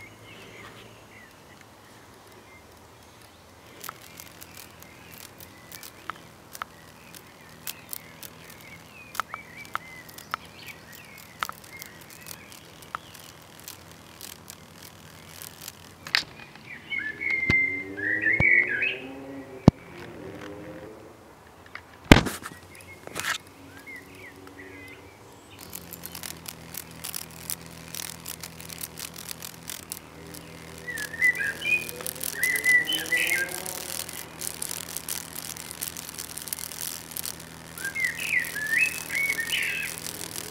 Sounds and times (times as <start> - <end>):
Insect: 0.0 - 40.5.